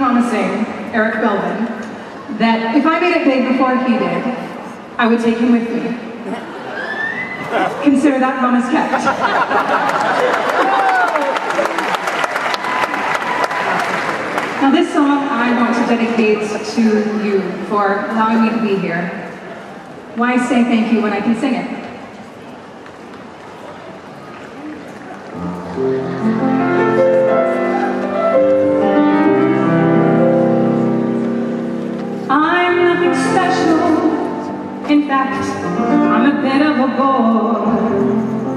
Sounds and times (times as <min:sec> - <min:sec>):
Speech: 0:14.6 - 0:19.2.